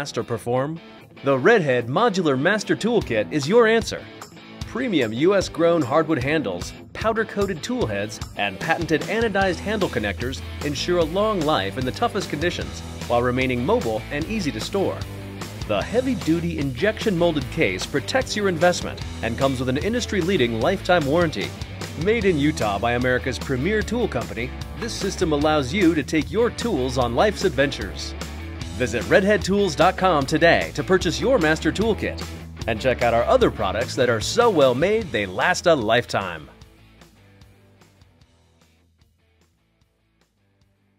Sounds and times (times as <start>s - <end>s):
Speech: 0.0s - 15.0s, 15.6s - 28.2s, 28.8s - 36.6s
Music: 0.0s - 40.9s.